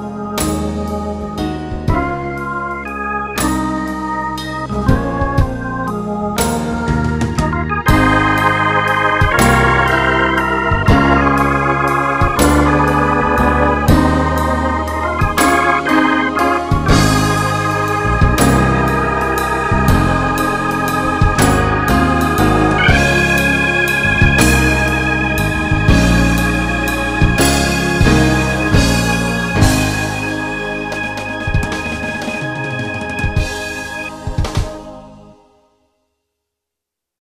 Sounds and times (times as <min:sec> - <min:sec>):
Tender music: 0:00.0 - 0:35.8
Background music: 0:00.0 - 0:36.1.